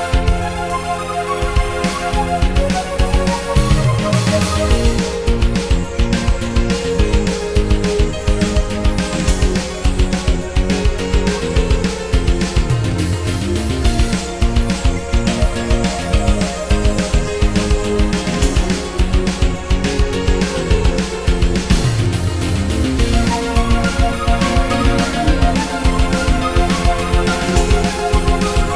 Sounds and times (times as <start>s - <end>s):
Music: 0.0s - 28.7s.